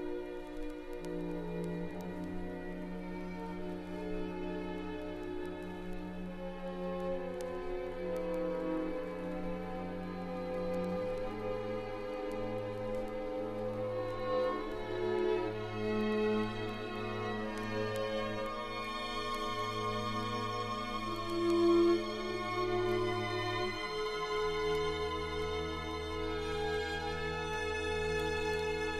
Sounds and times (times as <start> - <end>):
Violin, fiddle: 0.0 - 28.9.